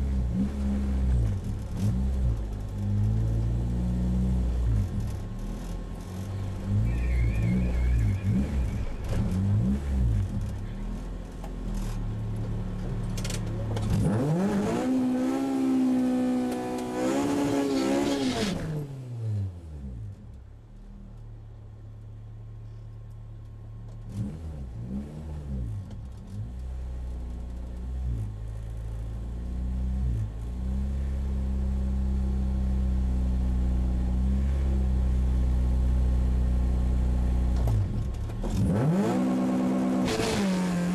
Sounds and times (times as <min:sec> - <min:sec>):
Car: 0:00.0 - 0:40.9.